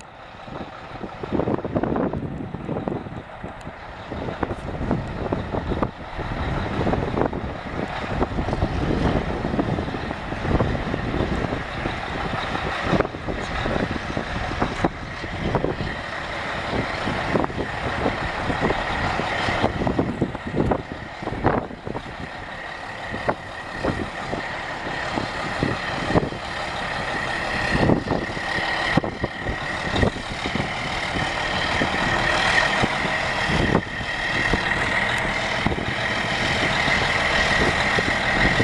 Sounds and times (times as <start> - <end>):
Truck: 0.0 - 38.6.